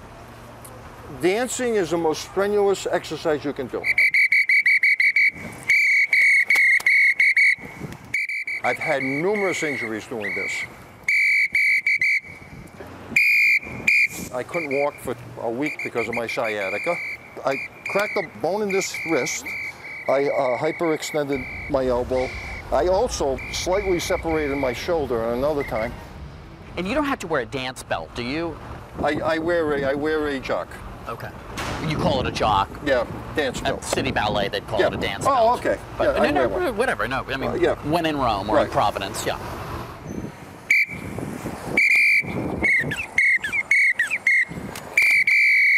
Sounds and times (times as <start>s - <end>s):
Outside, urban or manmade: 0.0s - 45.7s.